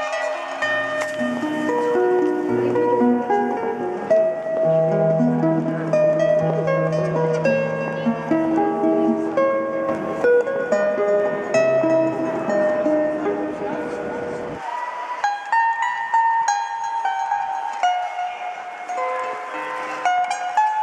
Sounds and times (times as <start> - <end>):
Strum: 0.0 - 20.8
Speech: 7.4 - 9.7, 17.9 - 20.6.